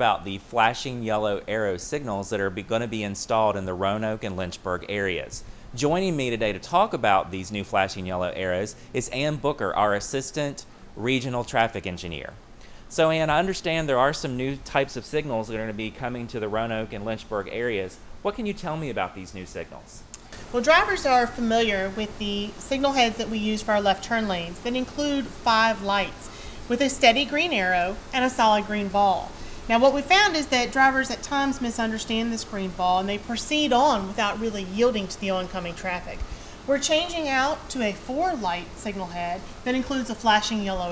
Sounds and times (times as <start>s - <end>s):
Speech: 0.0s - 20.0s, 20.6s - 40.9s.